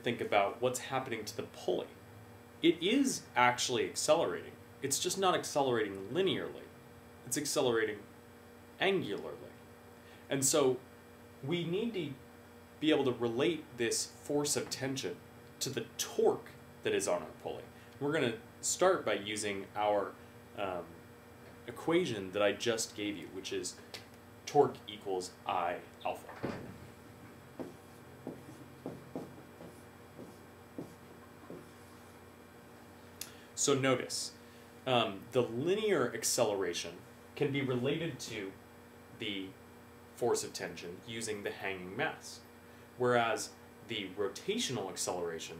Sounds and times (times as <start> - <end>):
Speech: 0.0 - 2.0, 2.6 - 6.7, 7.3 - 8.1, 8.8 - 9.6, 10.3 - 10.8, 11.4 - 12.2, 12.8 - 21.0, 21.7 - 23.8, 24.5 - 26.6, 33.6 - 38.6, 39.2 - 39.6, 40.2 - 45.5.